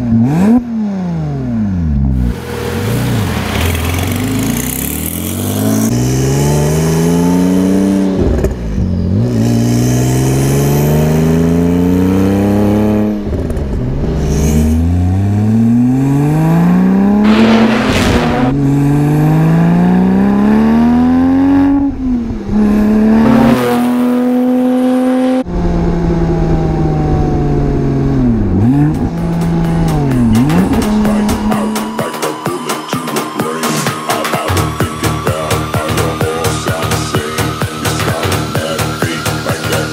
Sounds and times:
Music: 29.2s - 39.9s.

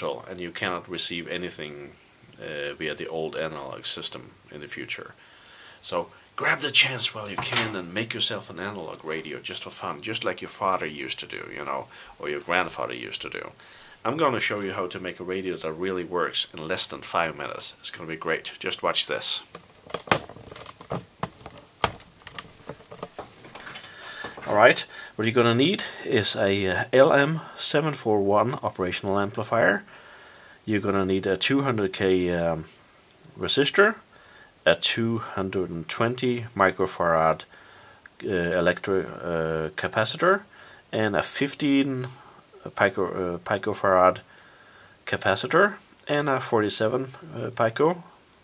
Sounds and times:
Speech: 0.0s - 5.2s, 5.8s - 19.5s, 24.4s - 29.9s, 30.7s - 37.5s, 38.2s - 44.3s, 45.1s - 48.2s.

